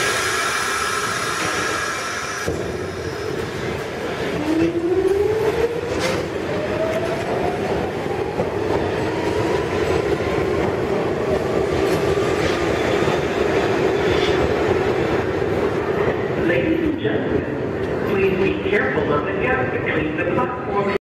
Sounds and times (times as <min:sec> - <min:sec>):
Subway, metro, underground: 0:00.0 - 0:21.0
Train: 0:00.0 - 0:21.0
Speech: 0:16.4 - 0:21.0.